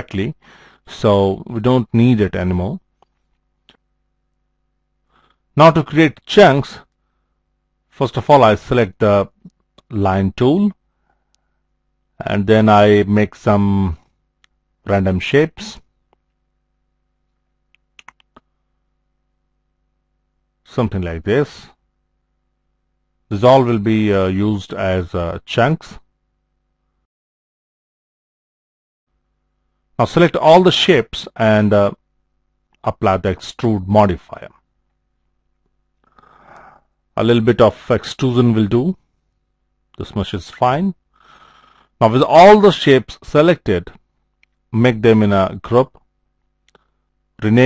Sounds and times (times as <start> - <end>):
Speech: 0.0 - 2.9, 5.6 - 6.9, 7.9 - 10.8, 12.2 - 14.1, 14.8 - 15.9, 20.7 - 21.8, 23.3 - 26.1, 30.0 - 32.0, 32.8 - 34.6, 36.6 - 39.0, 40.0 - 41.0, 42.0 - 44.0, 44.7 - 46.1, 47.4 - 47.6.